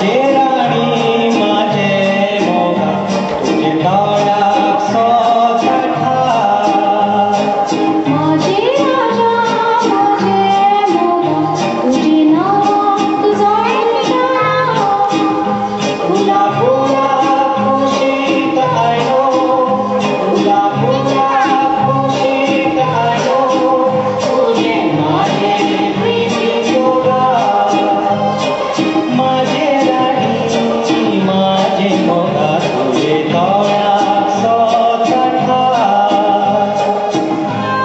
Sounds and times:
Inside, large room or hall: 0:00.0 - 0:37.8
Music: 0:00.0 - 0:37.8.

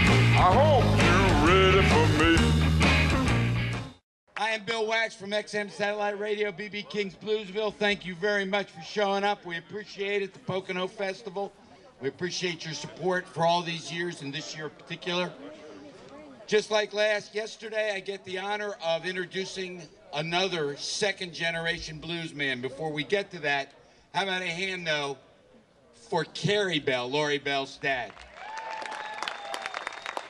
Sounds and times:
Speech: 0:04.4 - 0:25.2, 0:26.0 - 0:28.2.

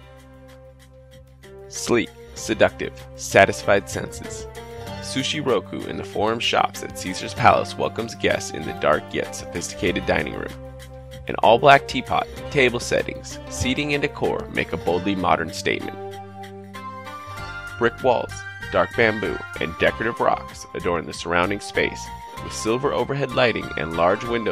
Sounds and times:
Music: 0:00.0 - 0:24.5
Speech: 0:01.7 - 0:10.6, 0:11.3 - 0:16.0, 0:17.8 - 0:24.5.

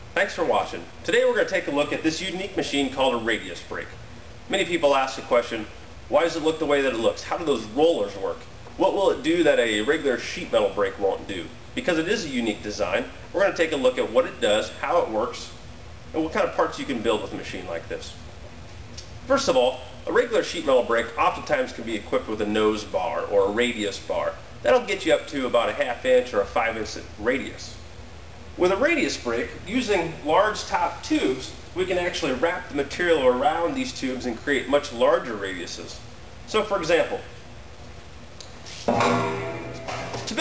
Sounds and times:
Speech: 0:00.2 - 0:18.2, 0:19.3 - 0:27.8, 0:28.6 - 0:37.4, 0:38.7 - 0:40.4.

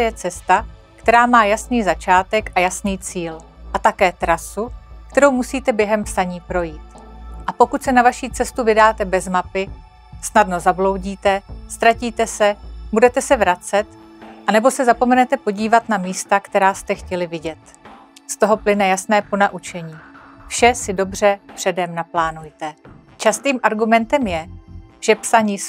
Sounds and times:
Speech: 0:00.0 - 0:06.8, 0:07.5 - 0:13.8, 0:14.5 - 0:17.7, 0:18.3 - 0:25.6
Music: 0:00.0 - 0:25.6.

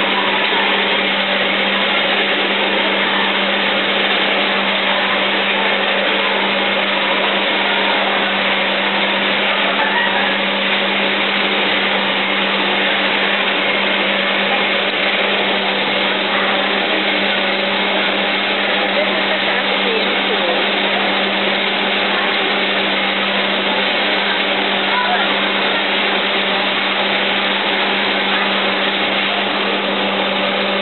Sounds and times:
Power tool: 0:00.0 - 0:30.8.

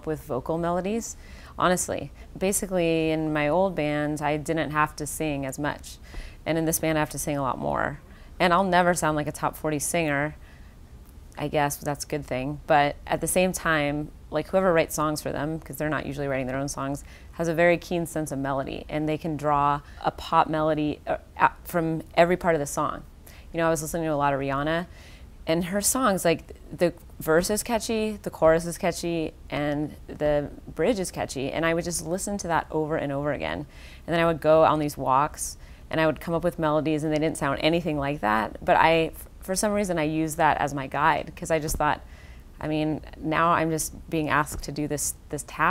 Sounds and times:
Speech: 0:00.0 - 0:10.4, 0:11.4 - 0:24.9, 0:25.5 - 0:42.0, 0:42.6 - 0:45.7
Inside, small room: 0:00.0 - 0:45.7.

